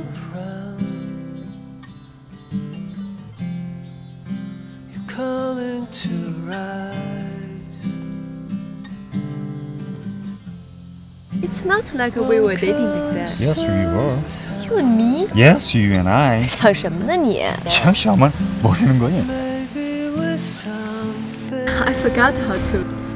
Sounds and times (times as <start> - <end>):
Music: 0.0 - 23.1
Speech: 11.4 - 19.4, 21.7 - 22.9.